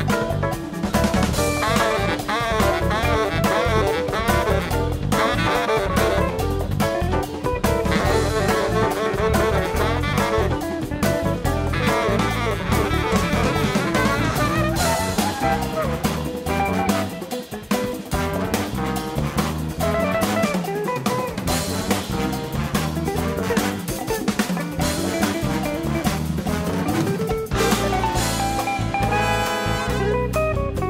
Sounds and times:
Guitar: 0:00.0 - 0:30.8
Jazz: 0:00.0 - 0:30.8.

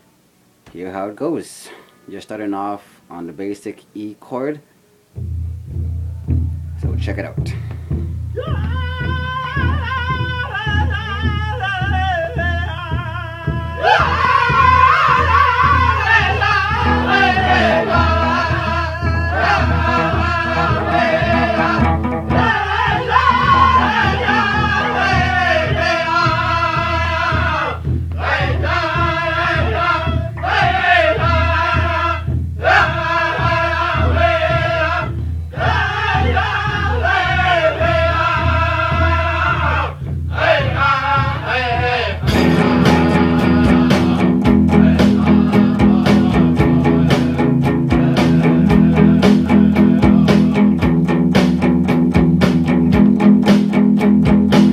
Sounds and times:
Acoustic guitar: 0:12.2 - 0:31.7, 0:42.2 - 0:54.7.

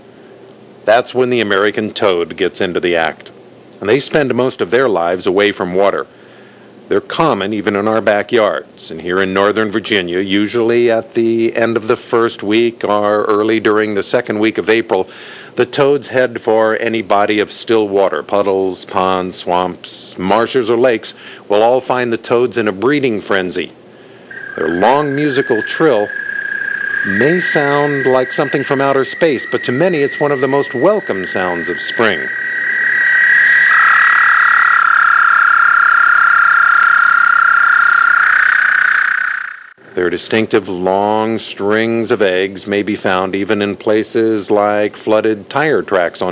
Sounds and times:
Frog: 0:24.2 - 0:39.8.

